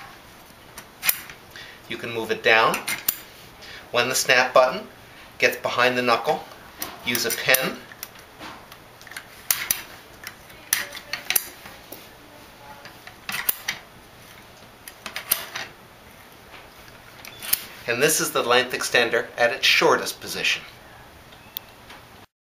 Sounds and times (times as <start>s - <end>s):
Speech: 1.9s - 2.8s, 7.0s - 7.8s, 17.9s - 20.7s.